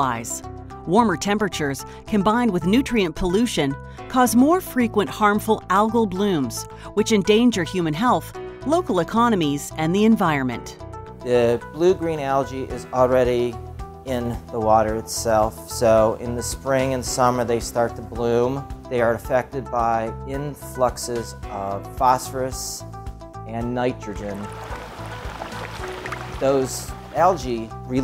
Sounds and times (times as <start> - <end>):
Speech: 0.0 - 22.8, 23.5 - 24.5, 26.4 - 28.0
Music: 0.0 - 28.0.